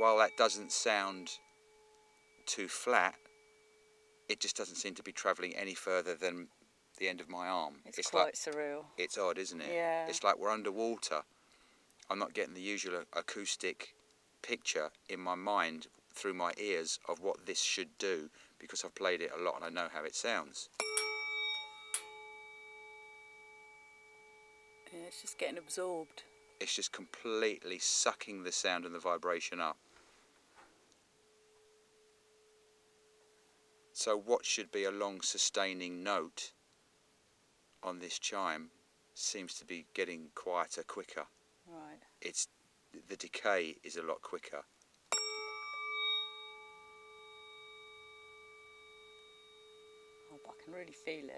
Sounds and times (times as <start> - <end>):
Percussion: 0.0 - 5.9, 6.5 - 10.4, 19.5 - 29.6, 45.1 - 51.3
Speech: 2.5 - 3.2, 4.3 - 11.2, 12.1 - 20.7, 24.9 - 29.8, 34.0 - 36.5, 37.8 - 44.7, 50.3 - 51.3.